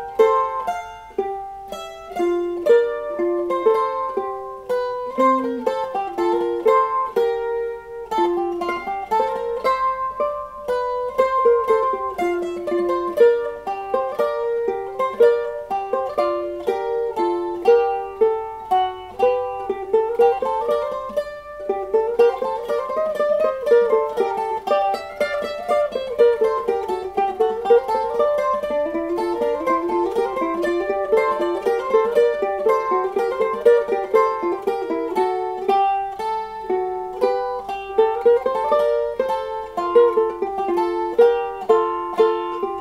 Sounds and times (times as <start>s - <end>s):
Mandolin: 0.0s - 42.8s.